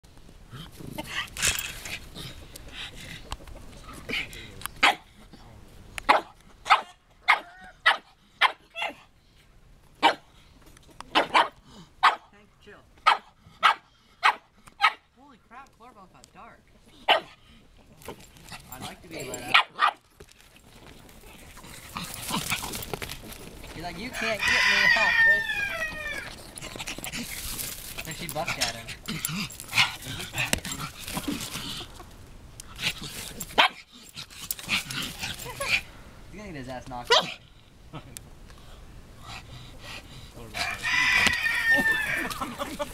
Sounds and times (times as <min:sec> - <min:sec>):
Bark: 0:04.8 - 0:05.0, 0:06.1 - 0:09.0, 0:10.0 - 0:10.2, 0:11.1 - 0:12.3, 0:13.0 - 0:15.0, 0:17.1 - 0:17.4, 0:19.5 - 0:20.0, 0:33.6 - 0:33.8, 0:37.1 - 0:37.4
Bow-wow: 0:04.8 - 0:05.0, 0:06.1 - 0:09.0, 0:10.0 - 0:10.2, 0:11.1 - 0:12.3, 0:13.0 - 0:15.0, 0:17.1 - 0:17.4, 0:19.4 - 0:20.0, 0:37.1 - 0:37.4.